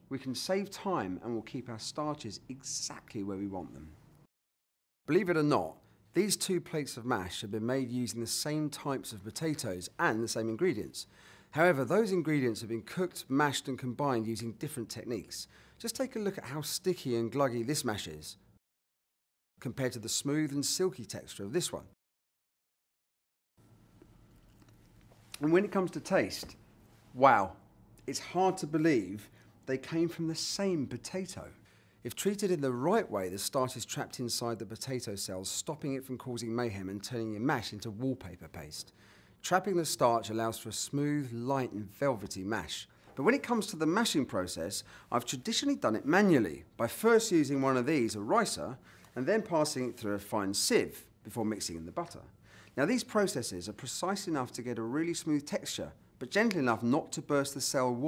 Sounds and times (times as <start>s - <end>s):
Speech: 0.0s - 4.0s, 5.1s - 18.4s, 19.6s - 22.0s, 25.4s - 58.0s.